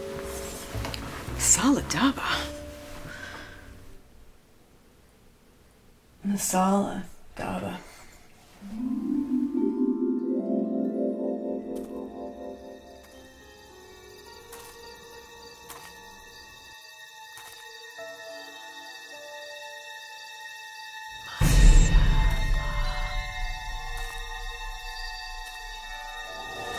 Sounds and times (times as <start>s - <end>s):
Music: 0.0s - 4.0s, 8.6s - 26.7s.